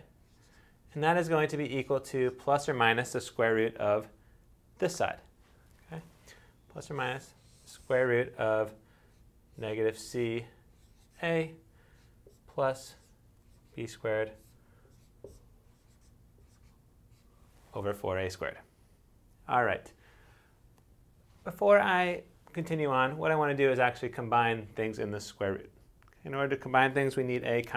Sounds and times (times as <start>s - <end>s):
Inside, small room: 0.0s - 27.7s
Speech: 0.9s - 4.2s, 4.8s - 5.3s, 6.7s - 8.8s, 9.6s - 10.6s, 11.2s - 11.6s, 12.4s - 13.1s, 13.8s - 14.5s, 17.7s - 18.7s, 19.4s - 20.0s, 21.4s - 27.7s.